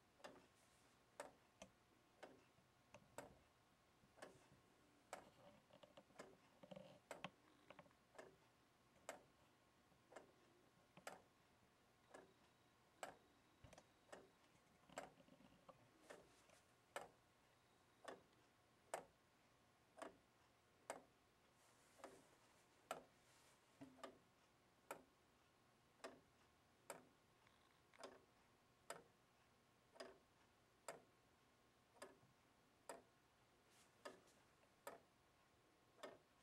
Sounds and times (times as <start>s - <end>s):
Tick-tock: 1.2s - 3.6s, 4.2s - 11.3s, 12.0s - 15.2s, 18.0s - 19.2s, 19.9s - 21.2s, 22.9s - 23.1s, 23.8s - 31.2s, 31.9s - 33.2s, 34.0s - 36.4s
Tick: 13.0s - 14.3s, 18.0s - 19.1s, 26.9s - 27.1s, 28.9s - 29.1s, 29.9s - 30.2s, 30.8s - 31.0s, 32.0s - 32.2s, 34.8s - 35.0s, 36.0s - 36.2s.